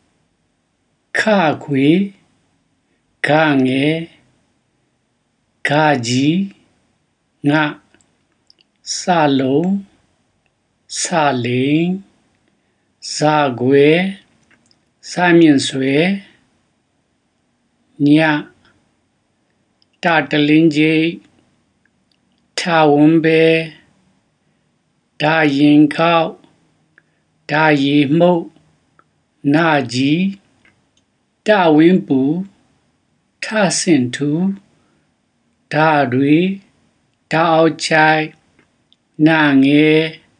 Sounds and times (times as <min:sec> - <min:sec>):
Speech: 0:01.1 - 0:02.2, 0:03.2 - 0:04.3, 0:05.6 - 0:06.7, 0:07.4 - 0:08.0, 0:08.8 - 0:10.0, 0:10.9 - 0:12.1, 0:13.0 - 0:14.3, 0:15.0 - 0:16.4, 0:18.0 - 0:18.6, 0:20.0 - 0:21.3, 0:22.6 - 0:23.9, 0:25.2 - 0:26.5, 0:27.5 - 0:28.6, 0:29.4 - 0:30.5, 0:31.4 - 0:32.6, 0:33.4 - 0:34.7, 0:35.7 - 0:36.7, 0:37.3 - 0:38.4, 0:39.2 - 0:40.3.